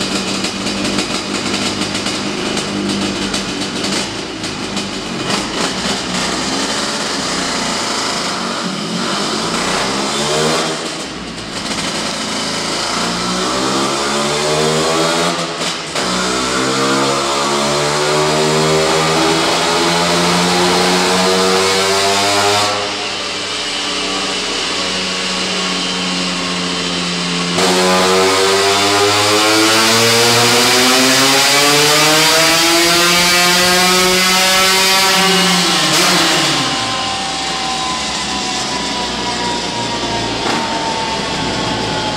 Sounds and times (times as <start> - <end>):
Heavy engine (low frequency): 0.0 - 42.1.